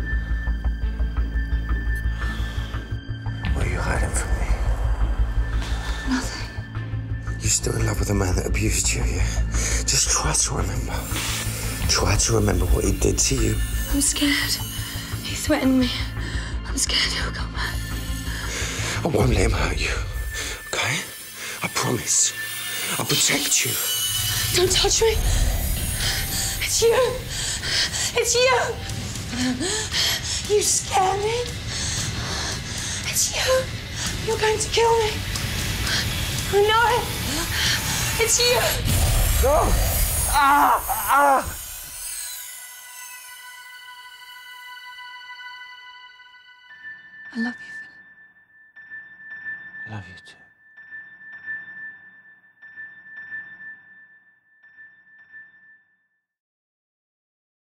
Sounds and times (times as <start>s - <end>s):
Music: 0.0s - 56.4s.